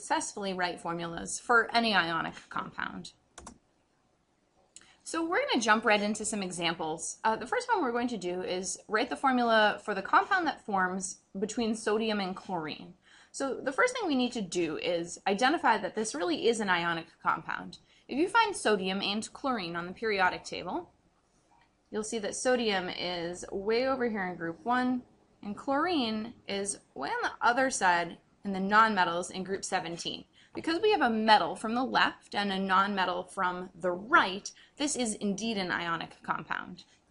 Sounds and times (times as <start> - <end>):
Speech: 0.0 - 3.2, 5.1 - 20.9, 22.0 - 36.8.